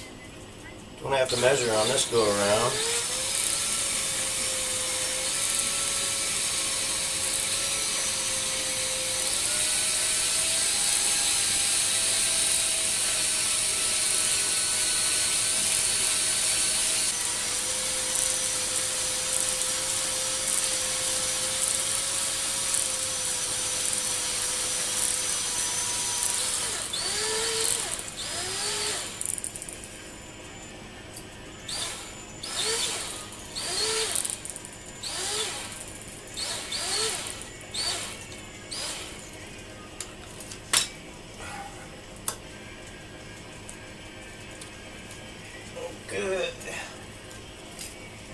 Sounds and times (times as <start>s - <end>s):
Drill: 1.2s - 29.7s, 31.6s - 39.3s.